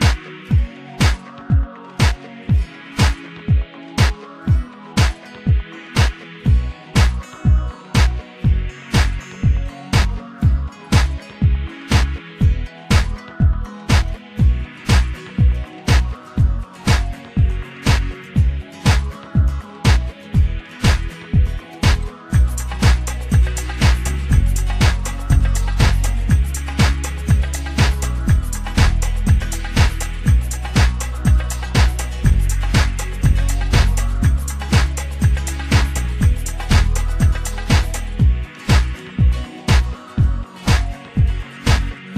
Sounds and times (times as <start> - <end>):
Music: 0.0 - 42.1.